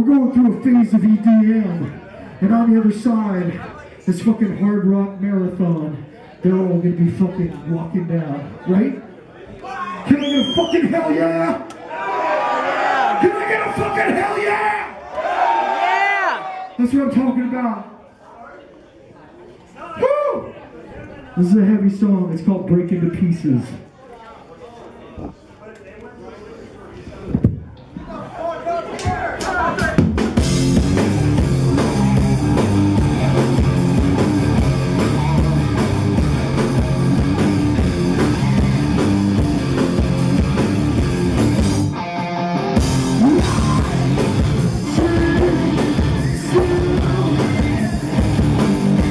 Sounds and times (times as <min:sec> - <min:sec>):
Music: 0:29.8 - 0:49.1.